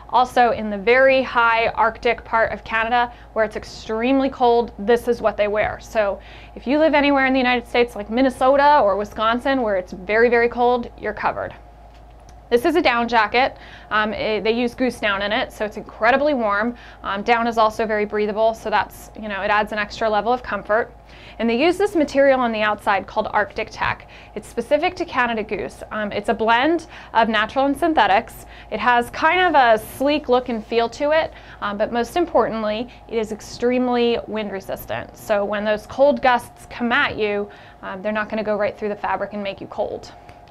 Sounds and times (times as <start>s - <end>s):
Speech: 0.1s - 11.6s, 12.5s - 40.2s.